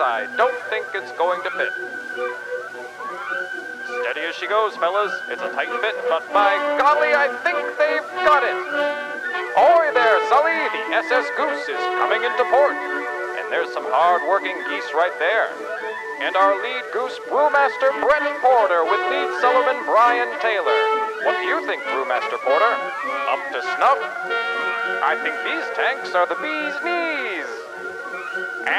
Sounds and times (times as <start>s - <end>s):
Speech: 0.0s - 1.7s, 3.9s - 8.7s, 9.6s - 12.8s, 13.4s - 15.6s, 16.2s - 24.1s, 25.0s - 27.6s
Music: 0.0s - 28.7s.